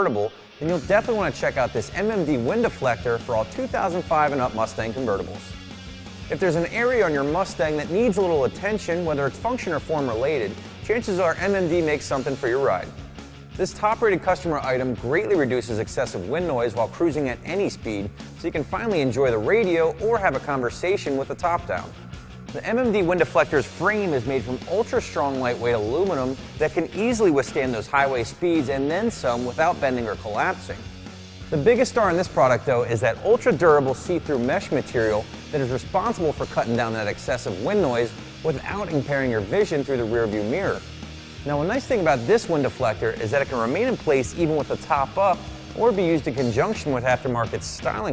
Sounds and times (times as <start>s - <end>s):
Speech: 0.0s - 5.5s, 6.3s - 13.0s, 13.6s - 30.8s, 31.5s - 40.8s, 41.4s - 48.1s
Music: 0.0s - 48.1s.